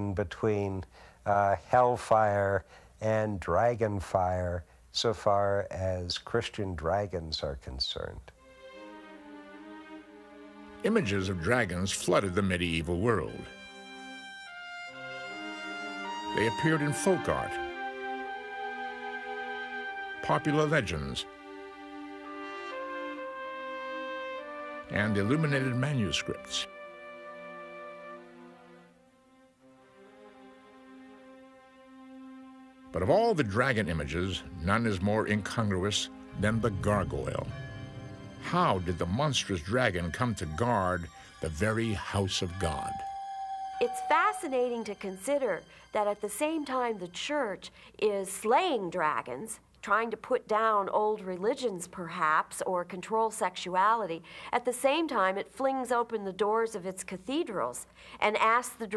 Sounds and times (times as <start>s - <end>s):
French horn: 8.4s - 47.1s.